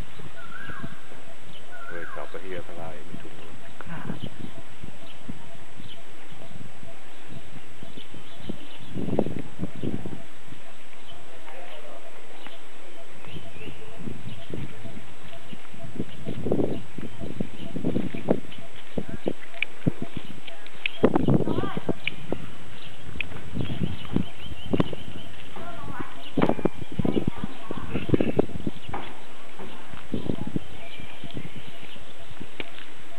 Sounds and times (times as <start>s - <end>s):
Outside, rural or natural: 0.0s - 33.1s.